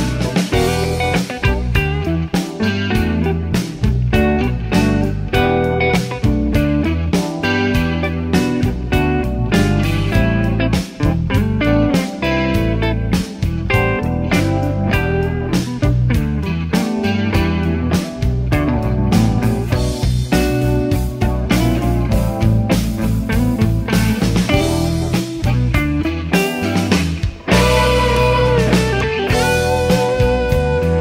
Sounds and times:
Guitar: 0.0 - 31.0
Jazz: 0.0 - 31.0.

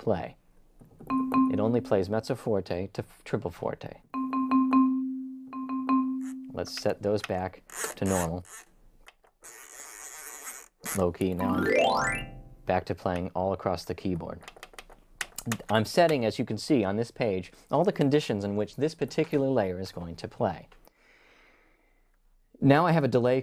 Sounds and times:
Speech: 0.0 - 0.4, 1.5 - 4.1, 6.5 - 8.5, 10.9 - 11.5, 12.7 - 14.4, 15.4 - 20.7, 22.6 - 23.4
Inside, small room: 0.0 - 23.4
Keyboard (musical): 1.1 - 1.9, 4.2 - 6.6, 11.4 - 12.7.

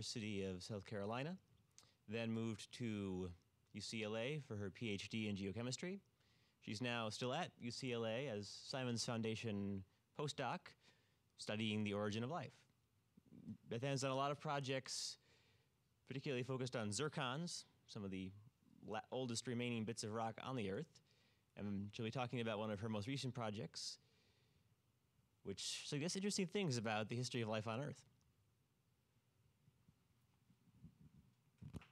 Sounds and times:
Speech: 0.0 - 10.8, 11.4 - 12.7, 13.4 - 15.2, 16.0 - 21.0, 21.6 - 24.0, 25.4 - 28.1.

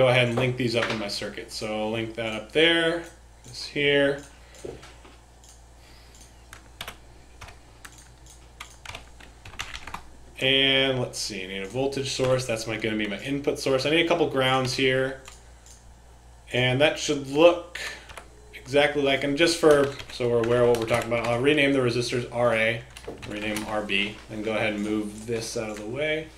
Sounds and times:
Speech: 0.0 - 4.3, 10.4 - 15.2, 16.5 - 18.0, 18.6 - 26.3
Computer keyboard: 5.4 - 10.1, 11.6 - 12.4, 19.6 - 21.4, 22.9 - 23.9.

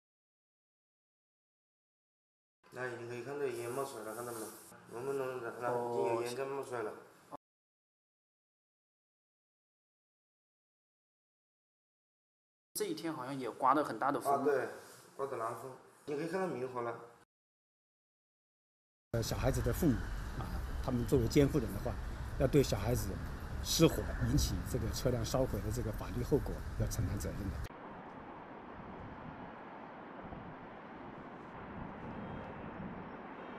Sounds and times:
Speech: 2.7 - 7.0, 12.8 - 17.1, 19.2 - 27.7.

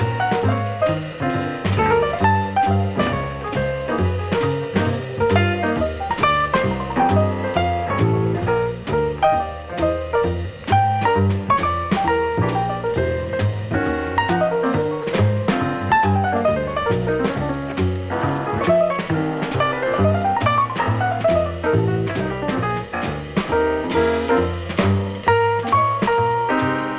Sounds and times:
Jazz: 0.0 - 26.9.

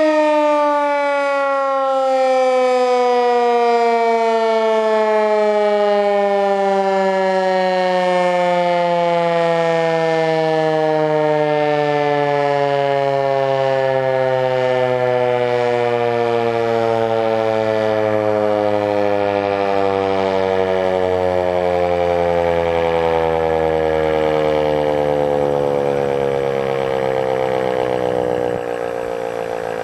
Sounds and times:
Civil defense siren: 0.0 - 29.8.

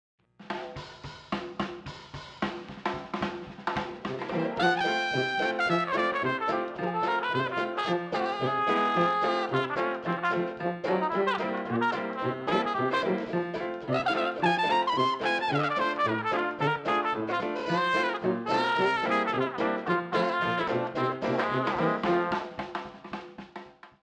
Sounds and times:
Music: 0.2 - 24.0.

